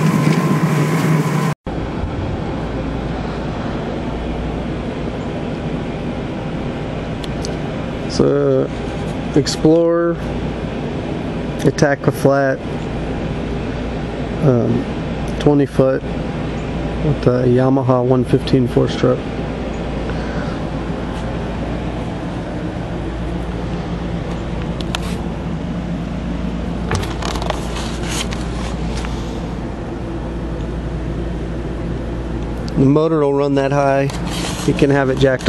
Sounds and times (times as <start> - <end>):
Speech: 8.1 - 8.7, 9.4 - 10.2, 11.6 - 12.6, 14.4 - 16.0, 17.0 - 19.2, 32.8 - 34.1, 34.7 - 35.4.